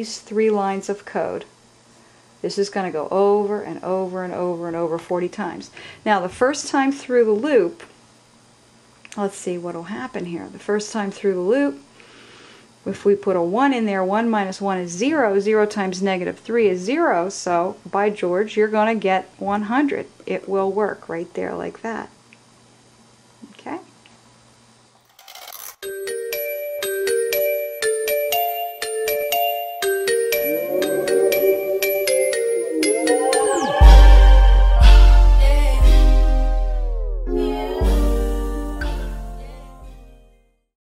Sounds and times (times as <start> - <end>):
Music: 25.8 - 40.7.